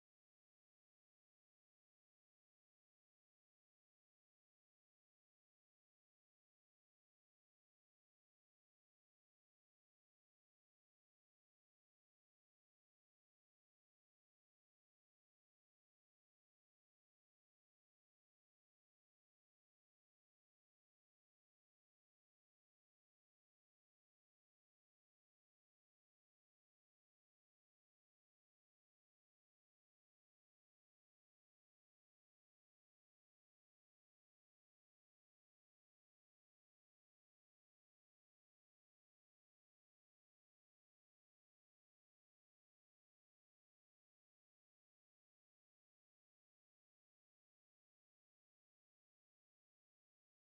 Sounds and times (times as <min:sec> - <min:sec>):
Silence: 0:00.0 - 0:50.4.